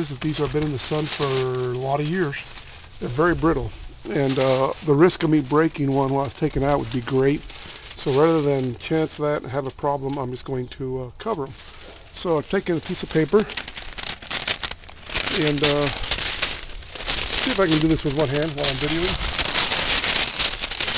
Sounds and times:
Speech: 0:00.0 - 0:11.6, 0:12.2 - 0:13.6, 0:15.3 - 0:16.0, 0:17.4 - 0:19.2.

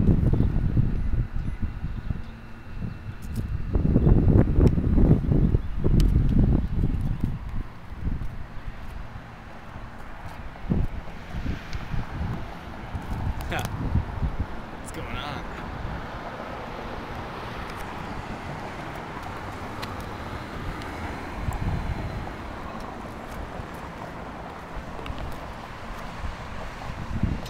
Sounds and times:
Wind: 0:00.0 - 0:27.4
Speech: 0:13.4 - 0:13.7, 0:14.8 - 0:15.6.

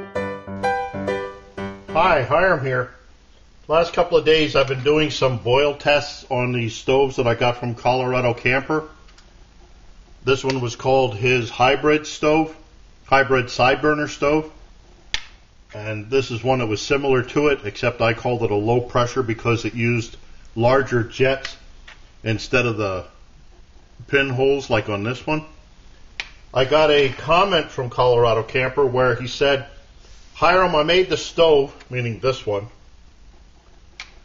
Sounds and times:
Speech: 0:02.0 - 0:03.0, 0:03.7 - 0:09.0, 0:10.2 - 0:14.6, 0:15.7 - 0:21.6, 0:22.2 - 0:23.2, 0:24.0 - 0:25.6, 0:26.6 - 0:29.8, 0:30.4 - 0:32.8.

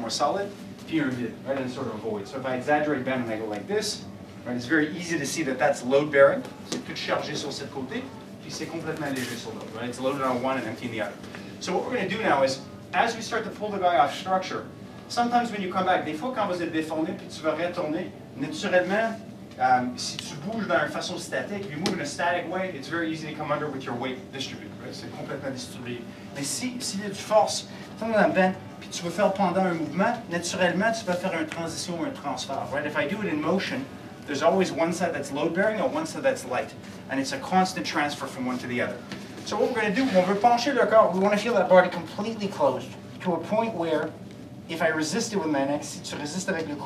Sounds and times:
Speech: 0:00.0 - 0:46.8.

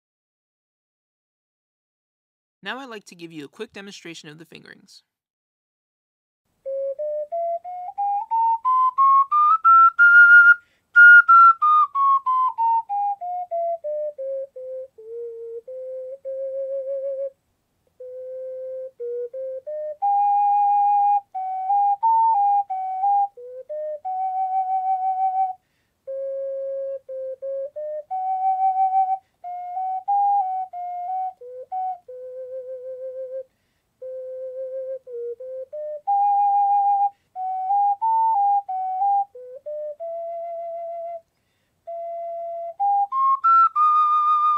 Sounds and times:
Wind instrument, woodwind instrument: 0:06.6 - 0:44.5.

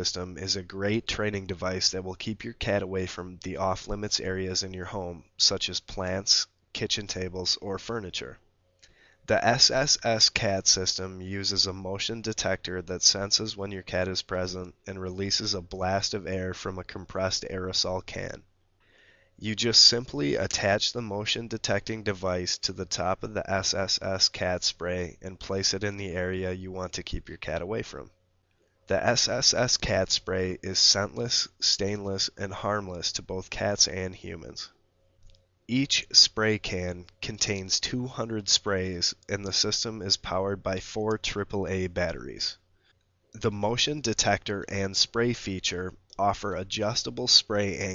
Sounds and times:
Speech: 0:00.0 - 0:08.4, 0:09.3 - 0:18.5, 0:19.4 - 0:28.1, 0:28.9 - 0:34.8, 0:35.7 - 0:42.6, 0:43.4 - 0:47.9.

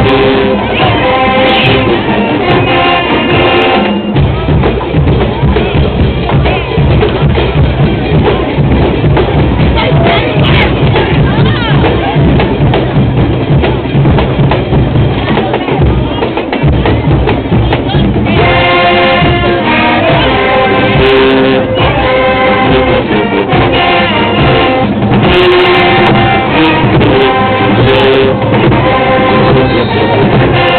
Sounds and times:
Music: 0:00.0 - 0:30.7.

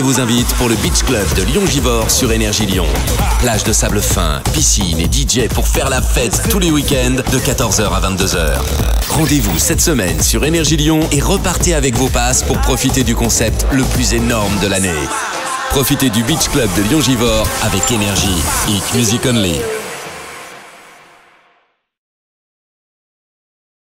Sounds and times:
Speech: 0:00.0 - 0:19.9
Music: 0:00.0 - 0:22.0.

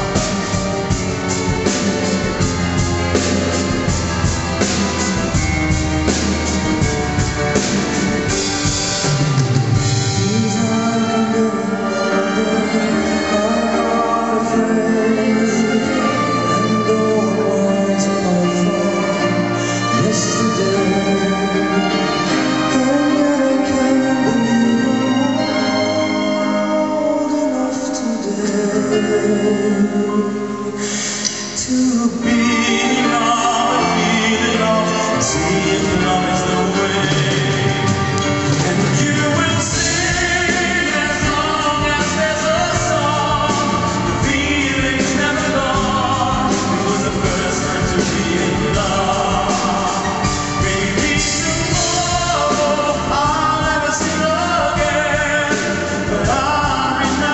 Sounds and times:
Orchestra: 0:00.0 - 0:57.3.

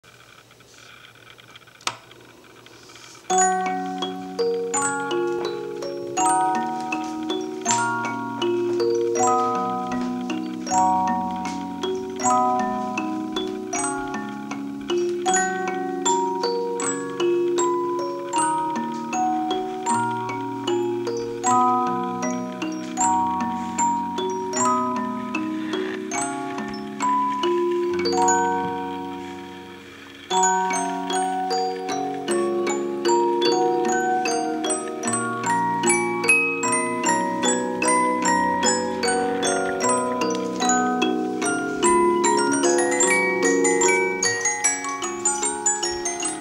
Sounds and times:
Inside, small room: 0:00.0 - 0:46.4
Music: 0:03.2 - 0:46.4.

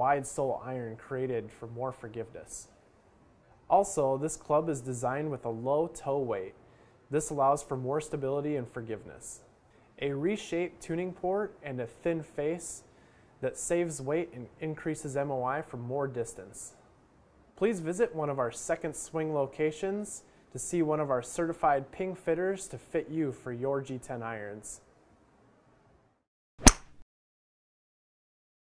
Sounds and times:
Speech: 0:00.0 - 0:02.8, 0:03.7 - 0:16.8, 0:17.6 - 0:24.9.

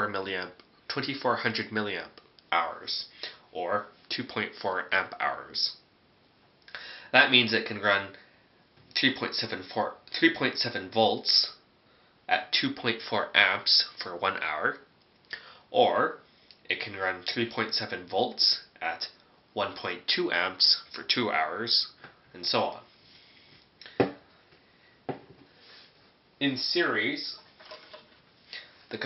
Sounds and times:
Speech: 0:00.0 - 0:05.9, 0:07.1 - 0:08.2, 0:09.0 - 0:11.7, 0:12.3 - 0:14.9, 0:15.7 - 0:22.9, 0:26.4 - 0:27.5.

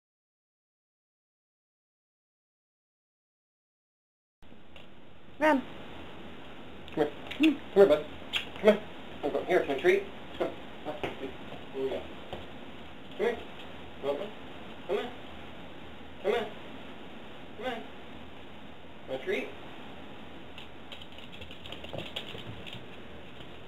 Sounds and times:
Speech: 0:05.4 - 0:05.7, 0:07.0 - 0:12.1, 0:13.2 - 0:15.2, 0:16.2 - 0:16.6, 0:17.6 - 0:17.9, 0:19.1 - 0:19.6.

